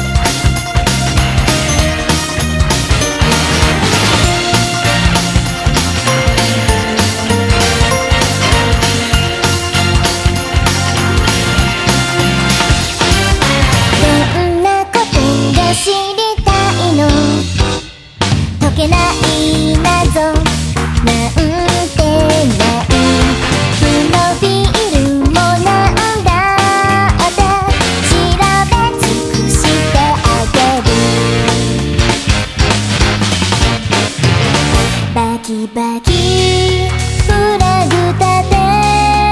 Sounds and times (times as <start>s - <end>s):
Music: 0.0s - 39.3s.